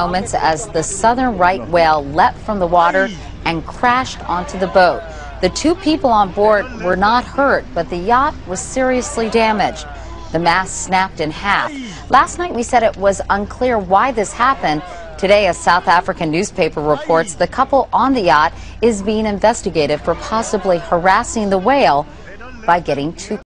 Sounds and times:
Speech: 0.0 - 23.4.

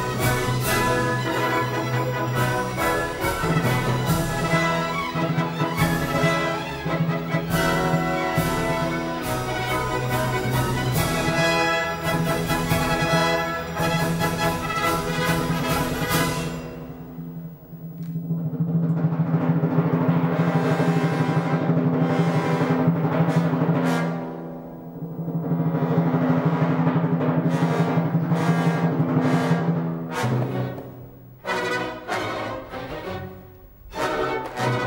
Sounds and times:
Timpani: 0.0 - 34.8.

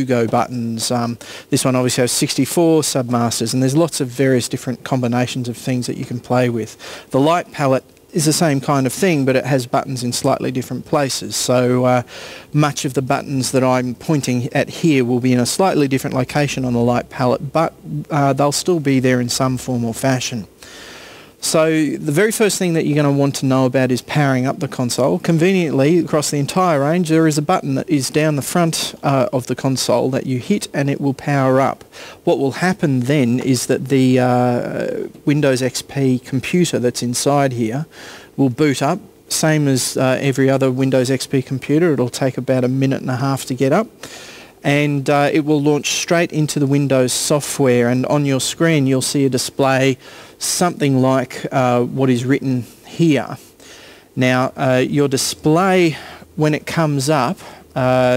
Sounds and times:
Narration, monologue: 0.0 - 58.1.

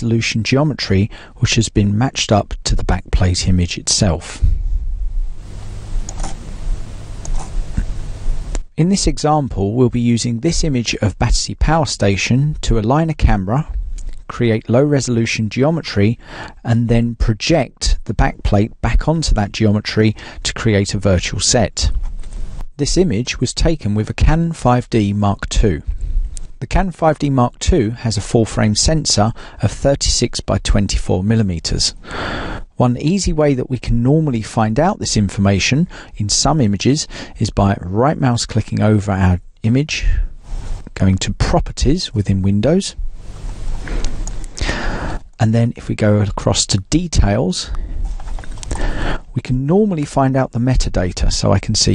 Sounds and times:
Speech: 0.0 - 4.5, 8.8 - 22.0, 22.8 - 25.9, 26.6 - 32.0, 32.8 - 40.3, 40.9 - 43.0, 45.4 - 47.8, 49.3 - 51.9.

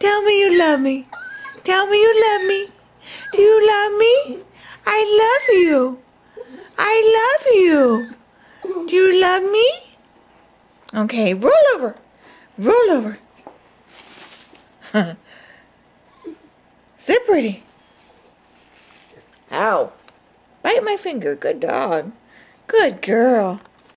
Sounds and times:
Speech: 0.0 - 6.0, 6.8 - 10.0, 10.9 - 12.0, 12.6 - 13.2, 17.0 - 17.7, 19.5 - 20.0, 20.6 - 23.7.

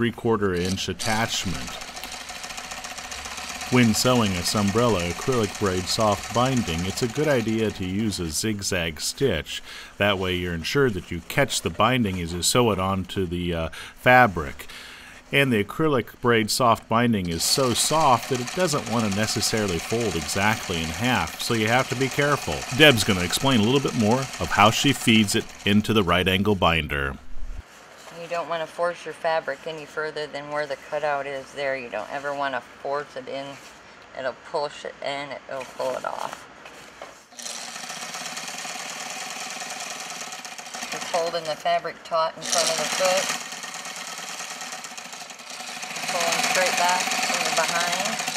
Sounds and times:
Speech: 0.0 - 1.8, 3.7 - 14.7, 15.3 - 27.2, 28.1 - 36.4, 41.0 - 43.3, 46.1 - 48.2
Sewing machine: 0.6 - 8.0, 17.3 - 26.0, 37.3 - 48.3.

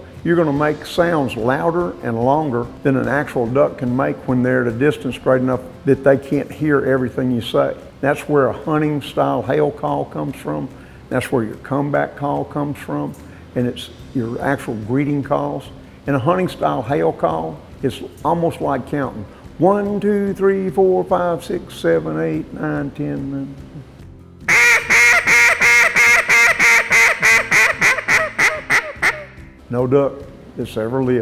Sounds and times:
Speech: 0.2 - 23.6, 29.7 - 31.2.

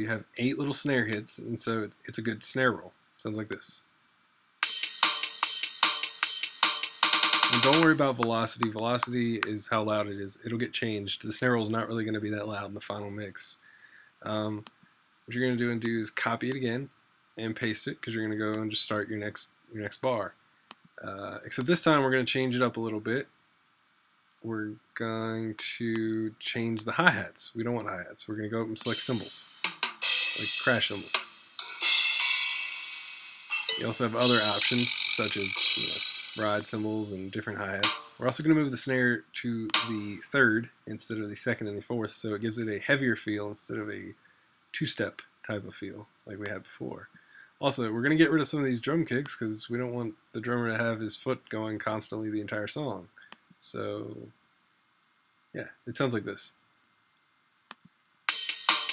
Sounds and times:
Speech: 0.0 - 3.8, 7.4 - 14.7, 15.3 - 20.3, 21.0 - 23.3, 24.4 - 29.5, 30.4 - 31.2, 33.8 - 44.2, 44.8 - 54.3, 55.6 - 56.6
Drum machine: 4.6 - 9.5, 28.8 - 37.2, 37.8 - 38.2, 39.7 - 40.2, 58.3 - 58.9
Drum: 4.6 - 9.6, 28.8 - 38.7, 39.6 - 40.2, 58.3 - 58.9.

